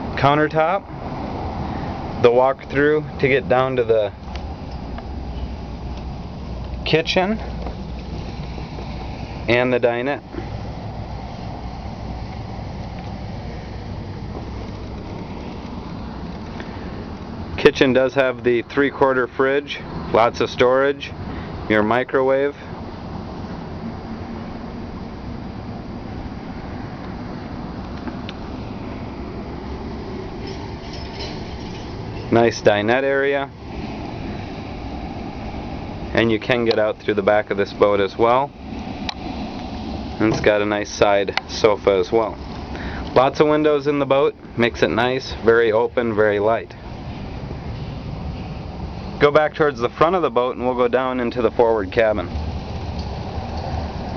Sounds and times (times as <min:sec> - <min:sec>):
Boat, Water vehicle: 0:00.0 - 0:54.1
Speech: 0:00.2 - 0:00.8, 0:02.2 - 0:04.2, 0:06.9 - 0:07.5, 0:09.5 - 0:10.2, 0:17.6 - 0:22.6, 0:32.3 - 0:33.5, 0:36.1 - 0:38.5, 0:40.2 - 0:42.4, 0:43.1 - 0:46.8, 0:49.2 - 0:52.3.